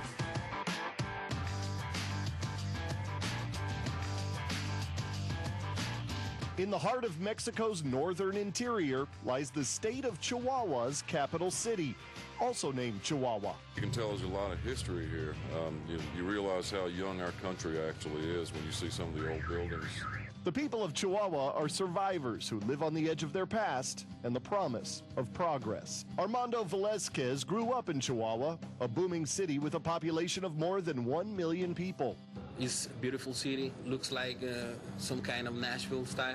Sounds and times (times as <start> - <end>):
Speech: 6.6 - 36.3.